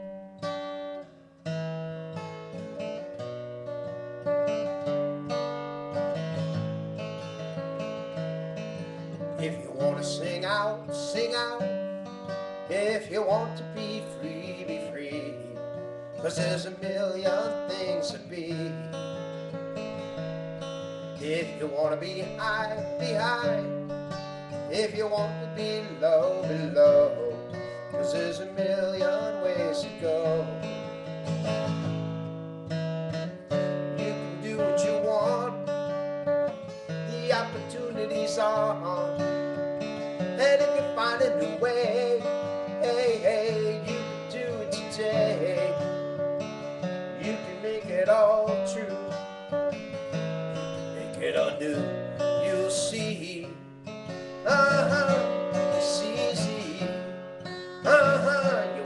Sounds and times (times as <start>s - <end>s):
Music: 0.0s - 58.8s.